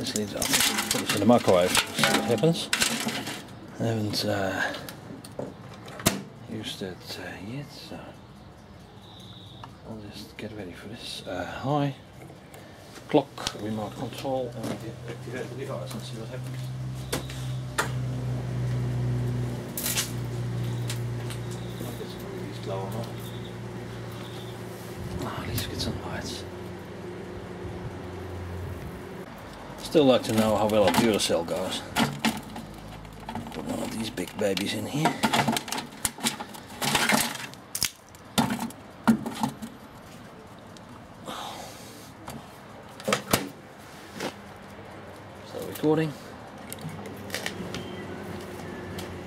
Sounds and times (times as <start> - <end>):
Speech: 3.8 - 4.8, 6.5 - 8.2, 9.8 - 12.0, 13.1 - 16.5, 21.8 - 23.2, 25.2 - 26.5, 29.8 - 31.9, 33.6 - 35.2, 45.4 - 46.3.